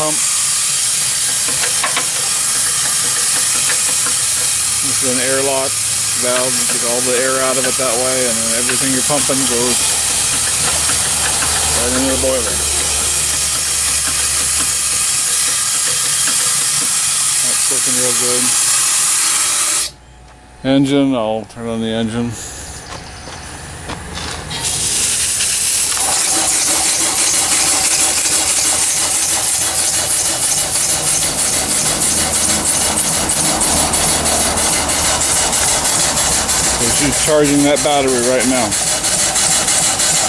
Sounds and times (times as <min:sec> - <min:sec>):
Hiss: 0:00.0 - 0:20.0, 0:24.6 - 0:40.2.